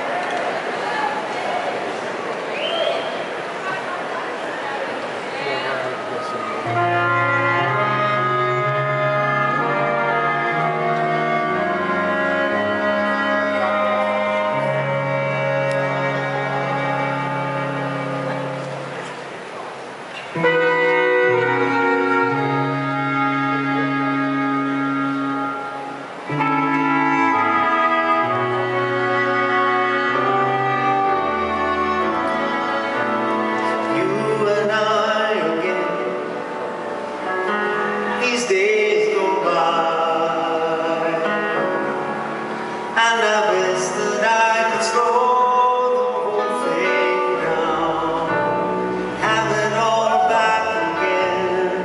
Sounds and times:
Music: 6.3 - 19.4, 20.2 - 51.8.

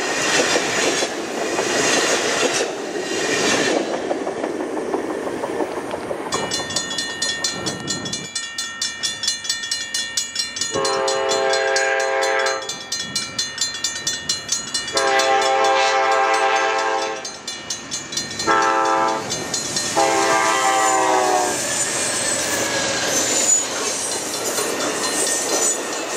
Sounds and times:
Railroad car, train wagon: 0.0 - 26.1
Train horn: 10.8 - 12.7, 14.9 - 17.3, 18.4 - 19.3, 20.0 - 21.6.

